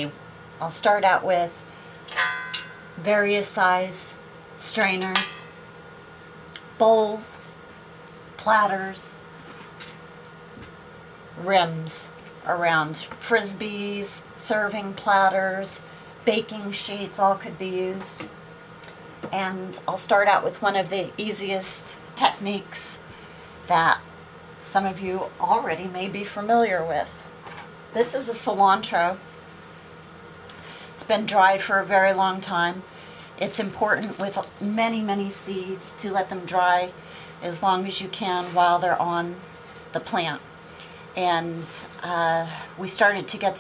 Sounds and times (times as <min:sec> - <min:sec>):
Speech: 0:00.0 - 0:01.6, 0:03.0 - 0:05.2, 0:06.8 - 0:07.5, 0:08.4 - 0:09.2, 0:11.4 - 0:18.3, 0:19.3 - 0:23.0, 0:23.7 - 0:24.0, 0:24.6 - 0:27.2, 0:28.0 - 0:29.2, 0:31.0 - 0:32.8, 0:33.4 - 0:39.4, 0:40.0 - 0:40.5, 0:41.2 - 0:43.6.